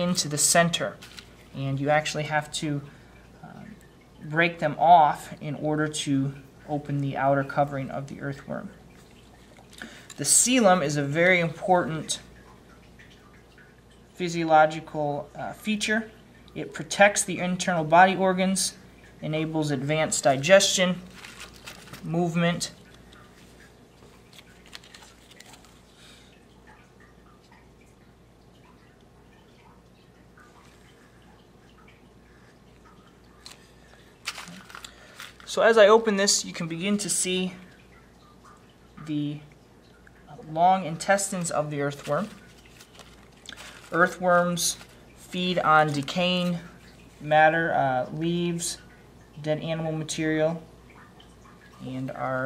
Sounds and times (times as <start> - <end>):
Speech: 0.0 - 1.0, 1.6 - 8.8, 10.2 - 12.3, 14.2 - 21.1, 22.0 - 22.8, 35.5 - 37.7, 39.0 - 39.5, 40.3 - 42.4, 43.9 - 50.7, 51.8 - 52.4.